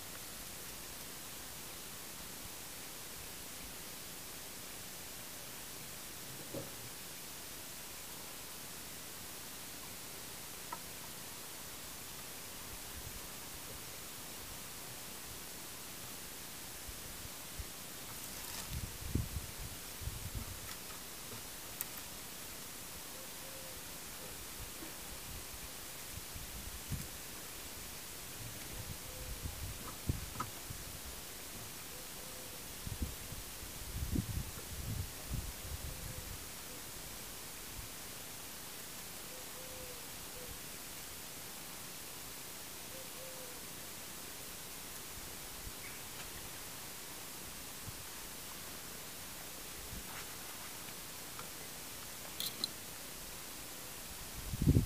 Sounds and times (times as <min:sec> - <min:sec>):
Bird: 0:45.8 - 0:46.4.